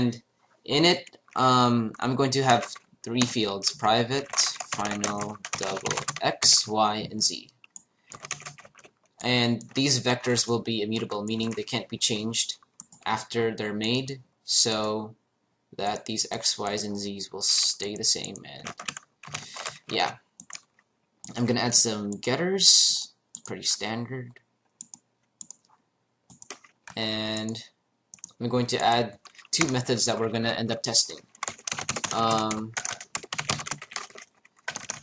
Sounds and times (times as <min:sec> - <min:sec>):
Speech: 0:00.0 - 0:07.5, 0:09.2 - 0:15.2, 0:15.8 - 0:18.7, 0:19.6 - 0:20.2, 0:21.3 - 0:24.4, 0:27.0 - 0:27.7, 0:28.4 - 0:31.2, 0:32.1 - 0:33.0.